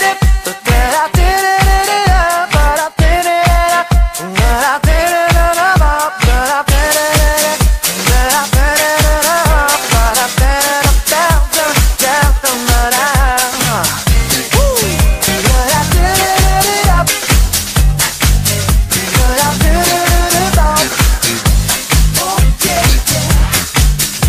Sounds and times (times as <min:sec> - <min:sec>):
Disco: 0:00.0 - 0:24.2
Funk: 0:00.0 - 0:24.2.